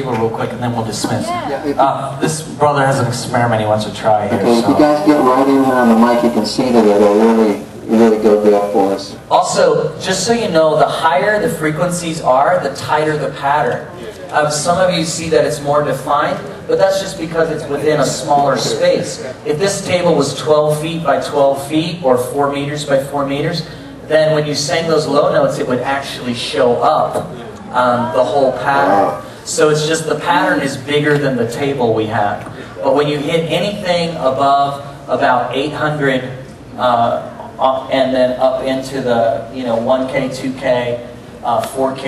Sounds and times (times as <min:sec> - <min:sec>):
Speech: 0:00.0 - 0:42.0.